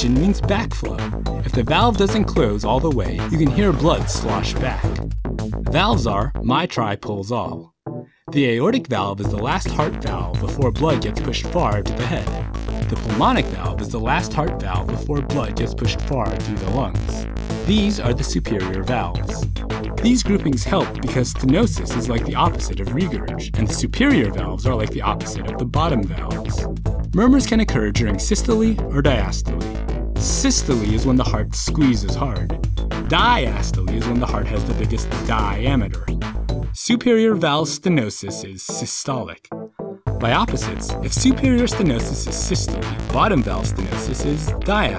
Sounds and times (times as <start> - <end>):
Speech: 0.0 - 5.0, 5.7 - 7.7, 8.3 - 19.4, 20.0 - 26.6, 27.2 - 29.6, 30.2 - 32.5, 33.1 - 36.1, 36.8 - 39.5, 40.2 - 44.9
Music: 0.0 - 44.9.